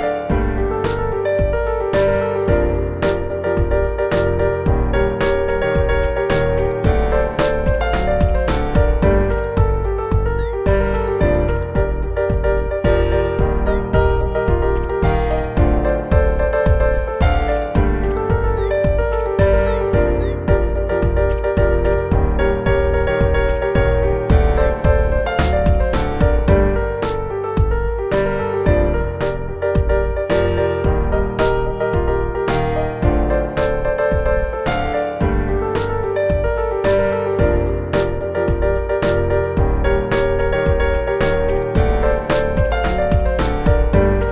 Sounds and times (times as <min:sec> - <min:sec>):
Music: 0:00.0 - 0:44.3.